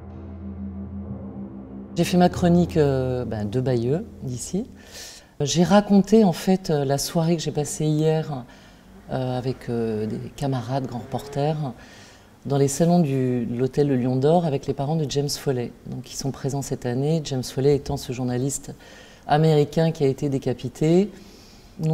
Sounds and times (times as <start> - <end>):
Speech: 2.0 - 4.8, 5.4 - 8.5, 9.1 - 11.8, 12.4 - 21.2.